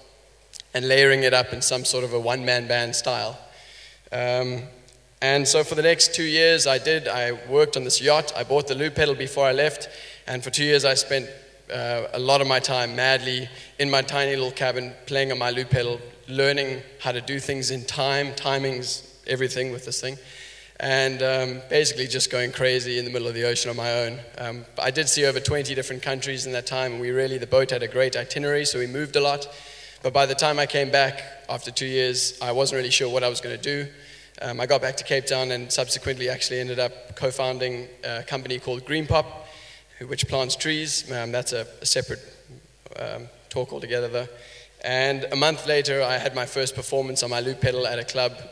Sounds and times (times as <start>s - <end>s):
Speech: 0.0s - 3.5s, 4.1s - 48.5s.